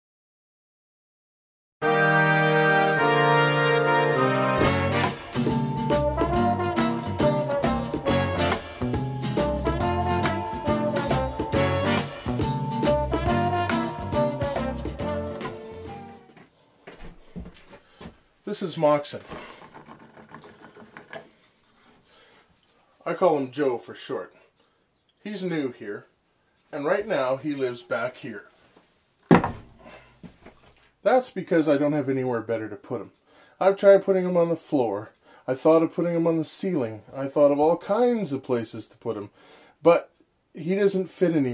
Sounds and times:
Music: 0:01.8 - 0:16.4.

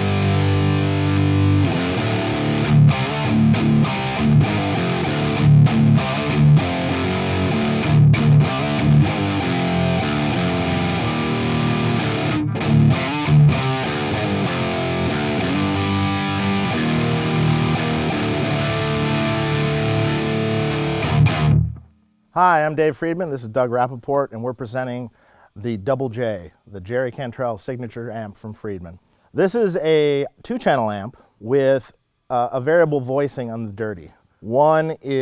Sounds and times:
Music: 0:00.0 - 0:22.2.

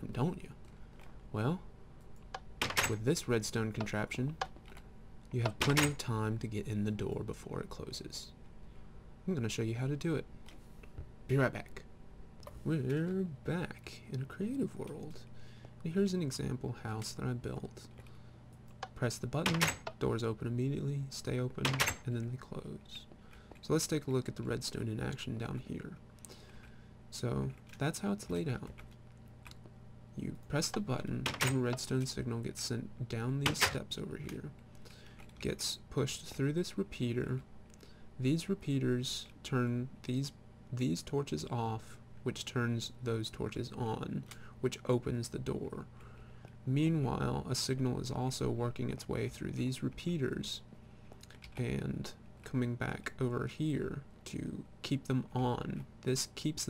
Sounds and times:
Speech: 0:00.0 - 0:00.6, 0:01.3 - 0:01.7, 0:02.8 - 0:04.4, 0:05.3 - 0:08.4, 0:09.2 - 0:10.3, 0:11.3 - 0:11.9, 0:12.6 - 0:17.9, 0:18.9 - 0:26.0, 0:27.1 - 0:28.8, 0:30.2 - 0:34.6, 0:35.4 - 0:37.5, 0:38.2 - 0:45.9, 0:46.6 - 0:56.7.

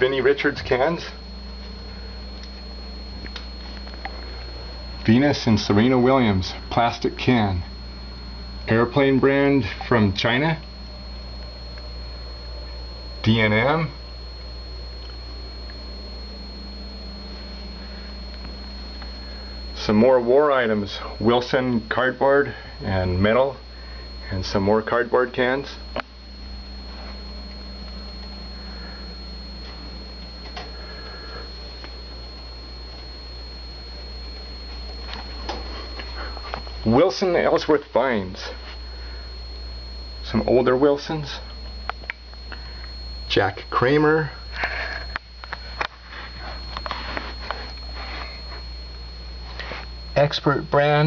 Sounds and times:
Speech: 0:00.0 - 0:01.2, 0:05.0 - 0:07.7, 0:08.7 - 0:10.6, 0:13.2 - 0:14.0, 0:19.8 - 0:23.6, 0:24.2 - 0:25.8, 0:36.8 - 0:38.6, 0:40.2 - 0:41.5, 0:43.3 - 0:44.4, 0:50.2 - 0:51.0.

